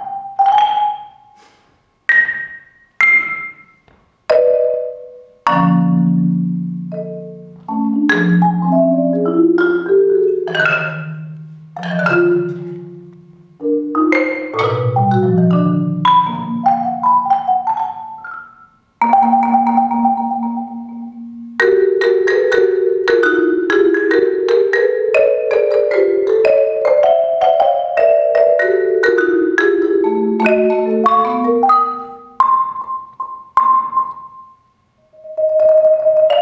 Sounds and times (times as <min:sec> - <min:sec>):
Vibraphone: 0:00.0 - 0:36.4.